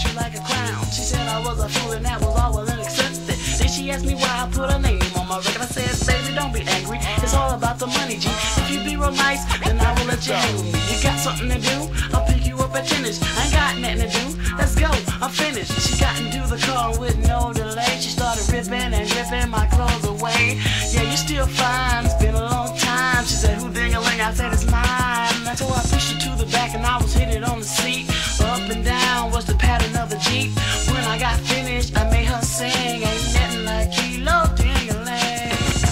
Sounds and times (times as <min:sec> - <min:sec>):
Hip hop music: 0:00.0 - 0:35.9.